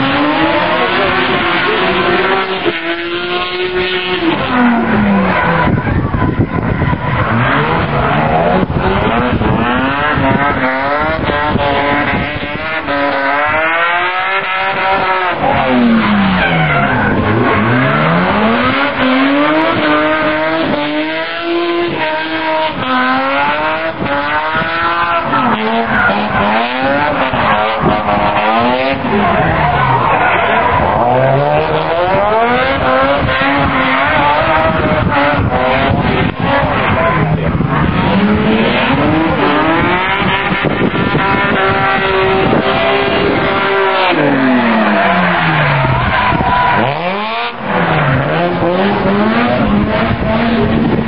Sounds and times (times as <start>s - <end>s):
Race car, auto racing: 0.0s - 51.0s
Skidding: 0.0s - 51.0s.